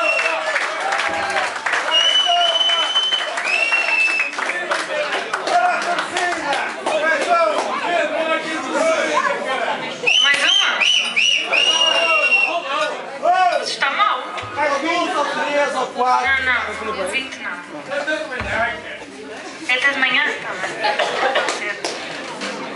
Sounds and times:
Speech: 4.4s - 22.2s.

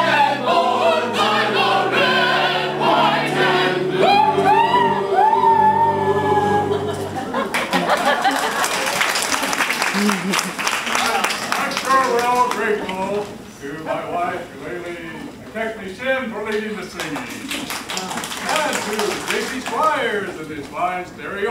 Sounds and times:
Speech: 11.0s - 21.5s.

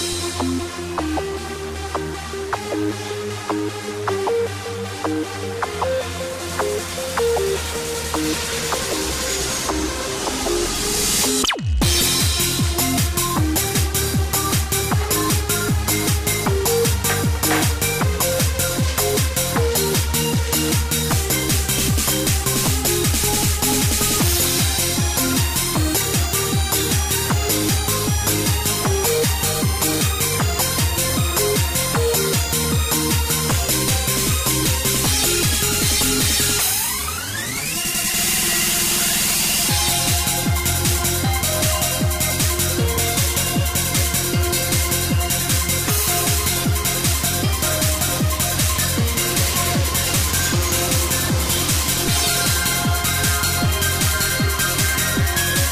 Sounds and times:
Music: 0.0s - 55.7s.

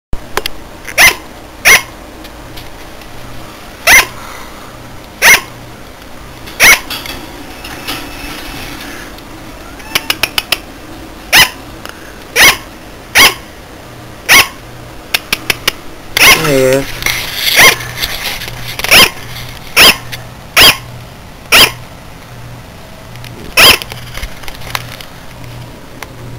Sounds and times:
Bark: 1.0s - 1.9s, 3.8s - 4.2s, 5.2s - 5.6s, 6.6s - 6.9s, 11.3s - 11.6s, 12.4s - 13.5s, 14.3s - 14.6s, 18.9s - 19.2s, 19.8s - 20.0s, 20.6s - 20.8s, 21.5s - 21.8s, 23.6s - 23.8s.

